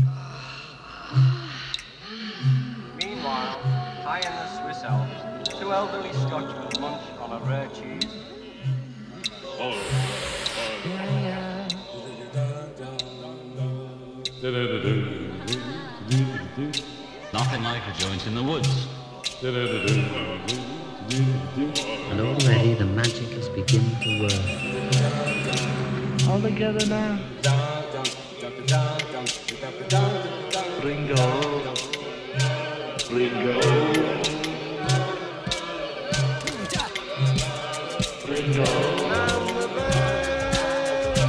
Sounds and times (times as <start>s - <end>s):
Music: 0.0s - 41.2s
Speech: 3.0s - 8.2s, 10.9s - 12.4s, 17.2s - 18.9s, 22.1s - 24.5s, 26.3s - 27.3s, 38.5s - 39.6s.